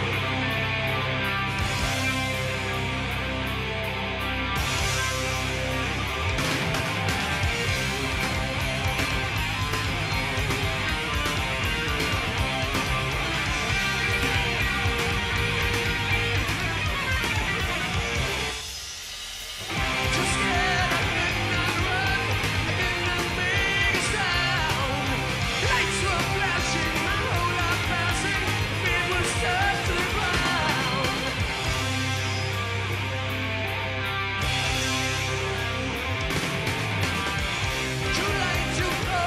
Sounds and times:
Music: 0.0 - 39.2.

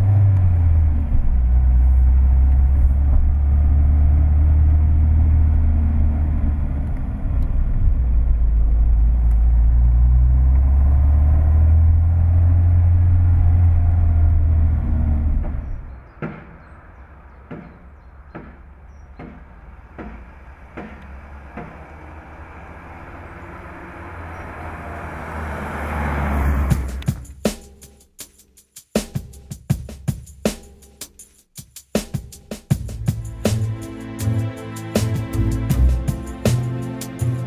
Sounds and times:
Medium engine (mid frequency): 0.0 - 27.5, 32.7 - 37.4.

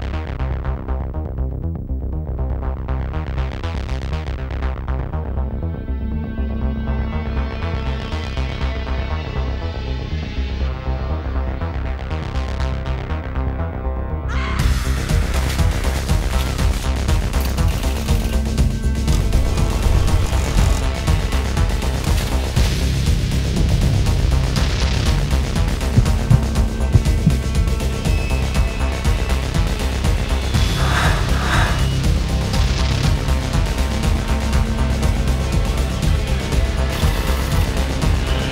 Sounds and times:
Music: 0.0 - 38.5.

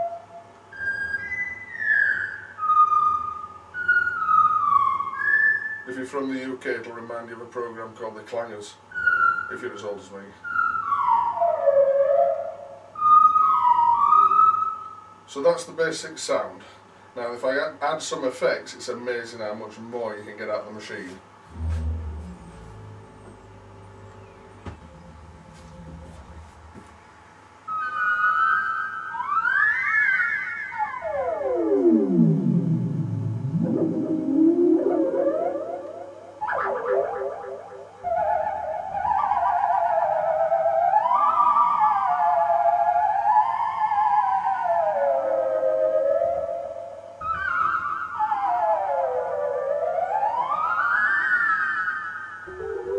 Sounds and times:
Theremin: 0.0 - 5.9, 8.9 - 15.2, 21.0 - 52.9
Speech: 5.9 - 8.8, 9.5 - 10.4, 15.3 - 21.2.

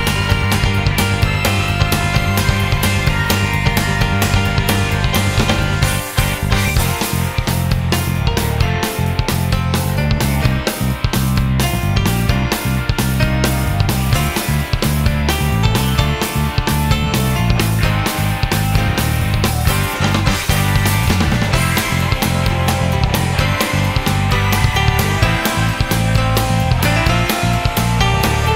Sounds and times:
Background music: 0.0 - 28.5.

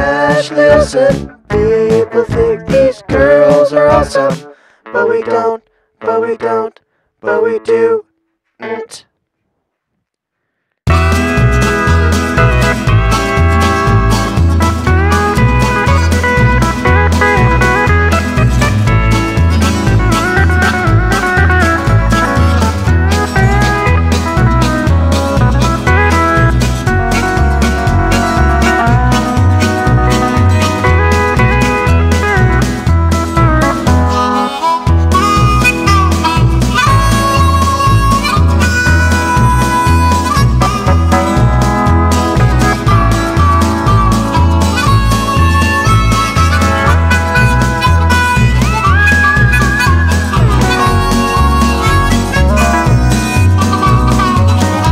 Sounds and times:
Music: 0.0 - 6.6, 10.9 - 54.9.

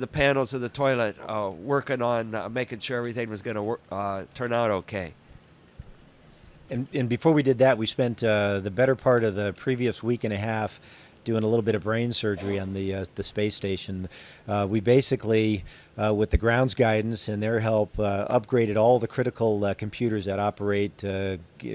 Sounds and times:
Speech: 0.0 - 5.2, 6.7 - 21.7.

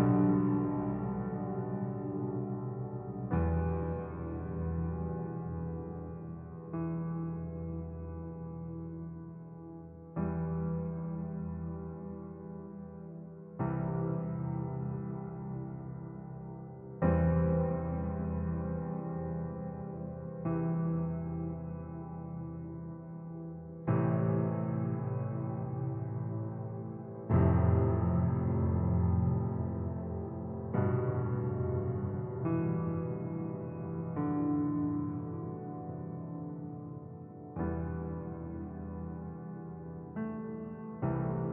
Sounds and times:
Music: 0.0 - 41.5.

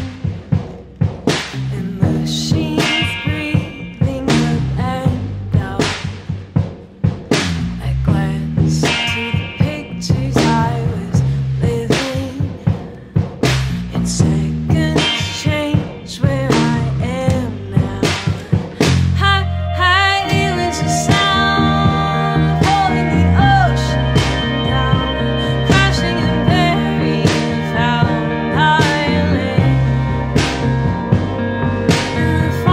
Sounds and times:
Guitar: 0.0 - 6.3, 7.3 - 32.7
Drum: 0.0 - 32.7.

